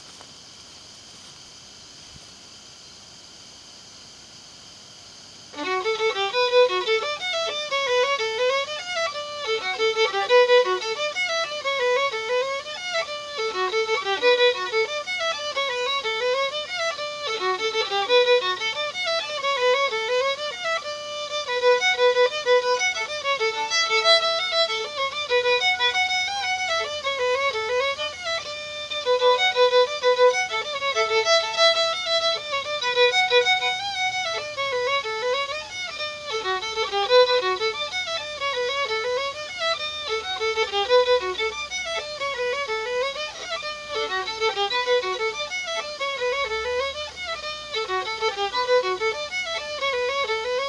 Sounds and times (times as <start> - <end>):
Violin, fiddle: 5.5 - 50.6.